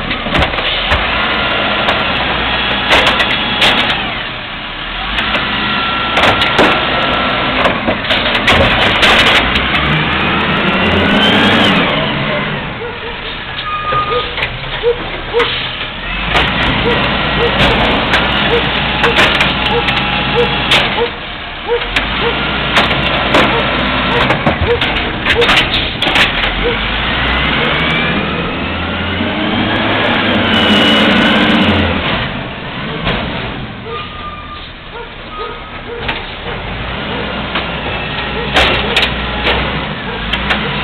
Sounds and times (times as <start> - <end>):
Truck: 0.0 - 40.8.